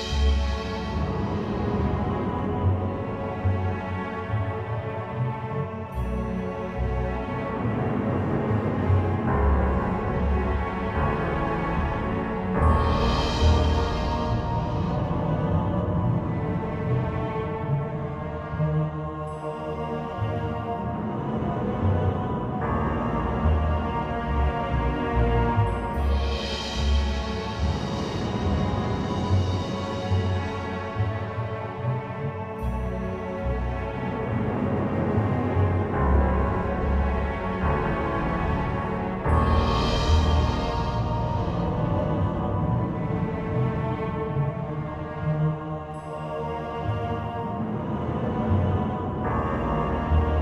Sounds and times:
Background music: 0.0 - 50.4.

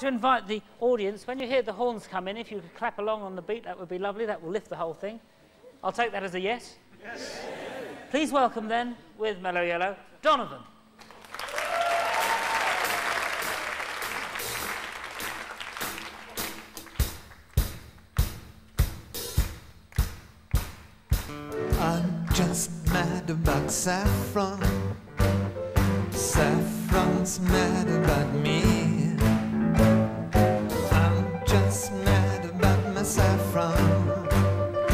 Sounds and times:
Musical instrument: 21.4 - 34.9.

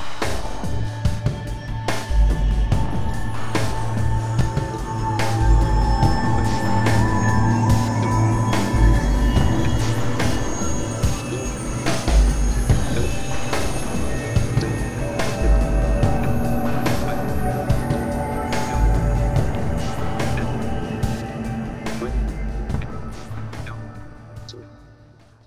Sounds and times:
Music: 0.0 - 25.4
Speech: 11.1 - 11.8, 12.8 - 13.4, 14.2 - 15.3, 24.5 - 24.7.

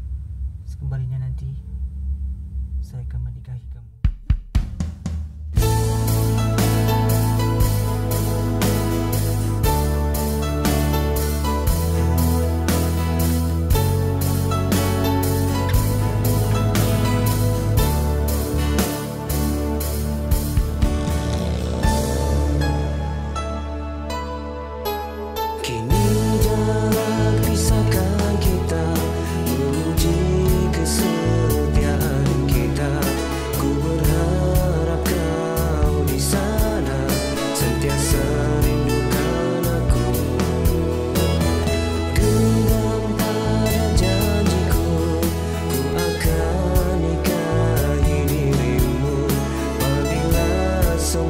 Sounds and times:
Music: 0.0 - 51.3.

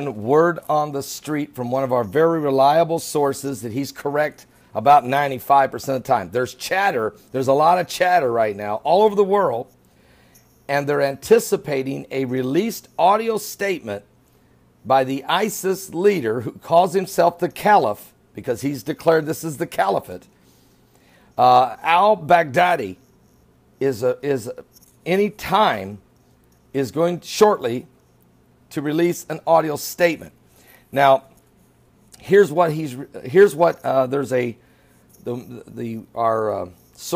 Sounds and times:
Male speech, man speaking: 0.0 - 9.7, 10.7 - 14.0, 14.9 - 20.2, 21.4 - 23.0, 23.8 - 26.0, 26.8 - 27.9, 28.7 - 30.3, 31.0 - 31.3, 32.2 - 34.6, 35.2 - 37.1.

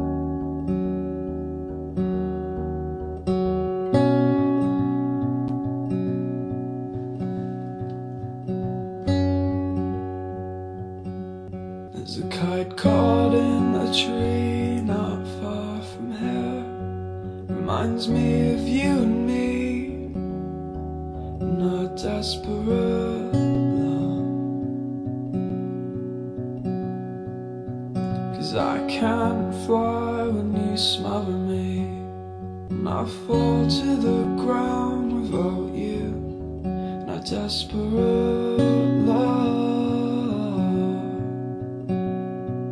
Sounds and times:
Music: 0.0 - 42.7.

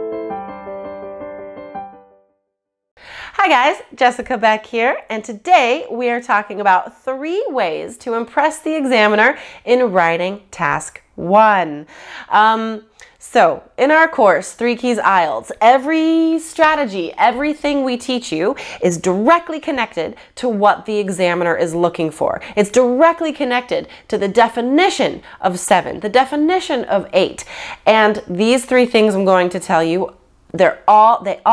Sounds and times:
Speech: 3.4 - 31.5.

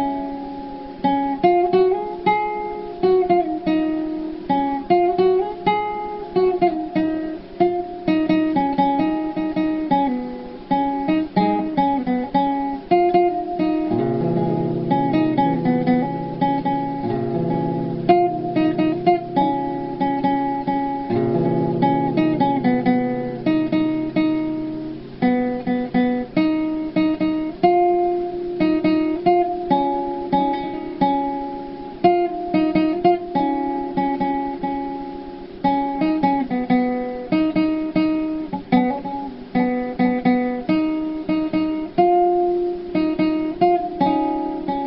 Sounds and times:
Acoustic guitar: 0.0 - 44.8.

